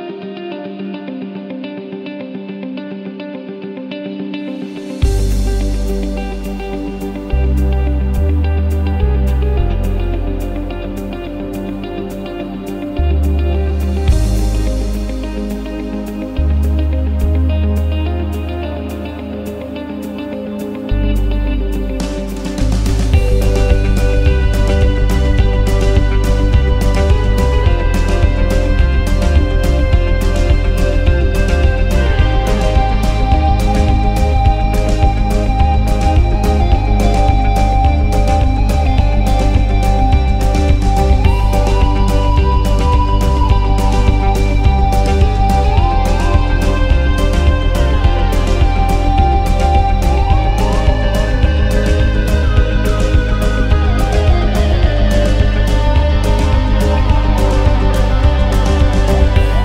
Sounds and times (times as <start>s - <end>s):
Acoustic guitar: 0.0s - 59.6s
Electric guitar: 0.0s - 59.6s
Independent music: 0.0s - 59.6s
Pop music: 0.0s - 59.6s
Tender music: 4.5s - 59.6s
Theme music: 4.6s - 59.6s.